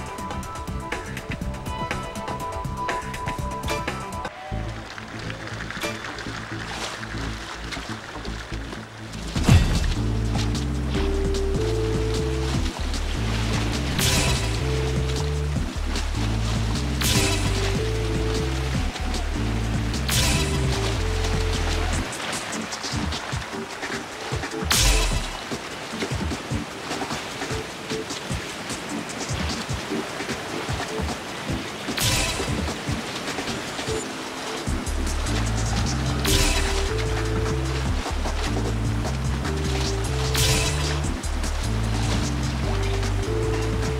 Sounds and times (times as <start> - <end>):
Music: 0.0 - 43.9.